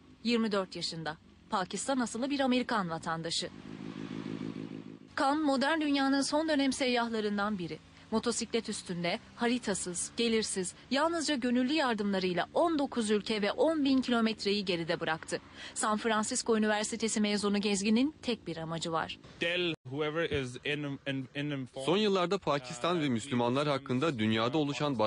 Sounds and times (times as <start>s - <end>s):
Speech: 0.3s - 3.5s, 5.2s - 25.0s.